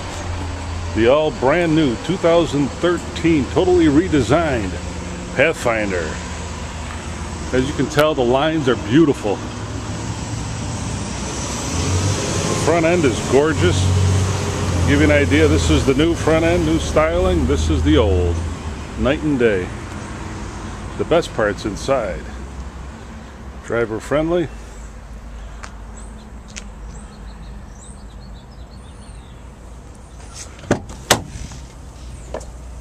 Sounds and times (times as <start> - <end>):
Speech: 1.0 - 4.8, 5.4 - 6.2, 7.5 - 9.4, 12.6 - 13.9, 14.9 - 18.4, 19.0 - 19.8, 21.0 - 22.4, 23.6 - 24.6.